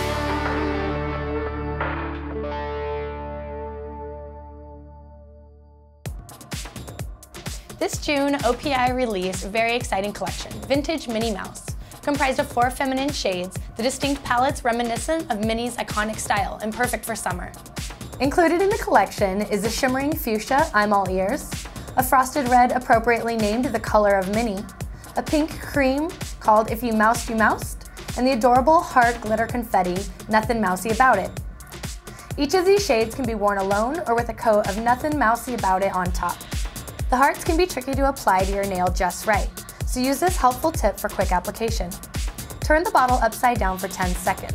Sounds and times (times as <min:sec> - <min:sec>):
Music: 0:00.0 - 0:44.5
Speech: 0:07.8 - 0:17.6, 0:18.2 - 0:31.3, 0:32.4 - 0:36.4, 0:37.1 - 0:42.0, 0:42.6 - 0:44.5.